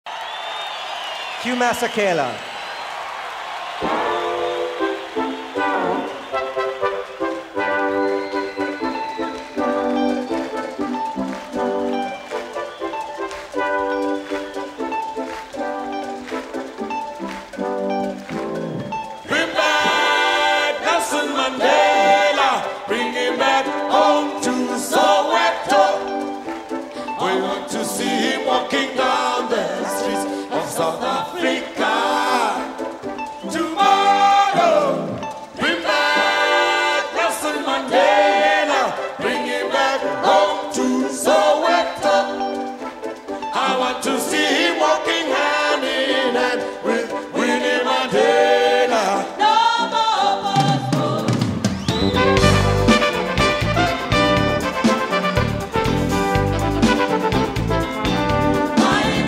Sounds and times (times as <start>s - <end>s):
Music: 0.1s - 59.2s
Speech: 1.4s - 2.4s.